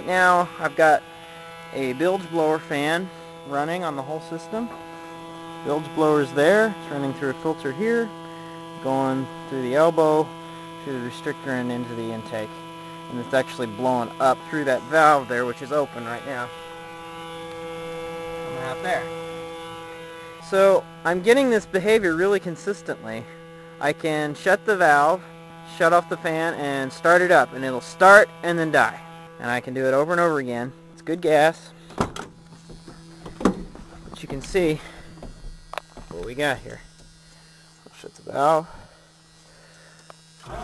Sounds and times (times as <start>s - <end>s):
Speech: 0.0s - 1.0s, 1.7s - 4.8s, 5.6s - 8.1s, 8.8s - 16.5s, 18.4s - 19.1s, 20.4s - 31.7s, 34.1s - 35.0s, 36.1s - 36.8s, 37.9s - 38.8s.